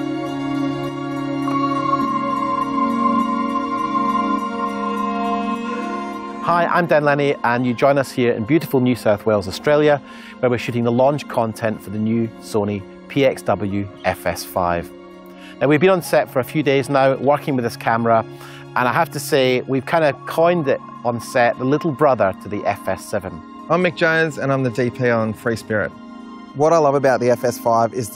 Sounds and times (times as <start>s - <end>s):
Music: 0.0s - 28.1s
Speech: 6.5s - 14.9s, 15.6s - 18.2s, 18.8s - 26.0s, 26.6s - 28.1s.